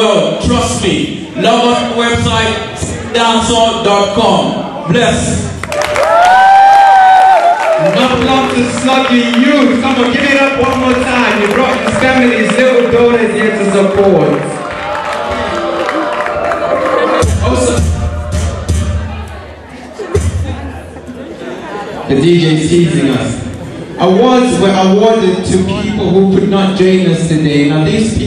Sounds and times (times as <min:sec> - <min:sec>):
Speech: 0:00.0 - 0:05.5, 0:07.8 - 0:14.6, 0:21.8 - 0:28.2
Cheering: 0:05.6 - 0:19.5.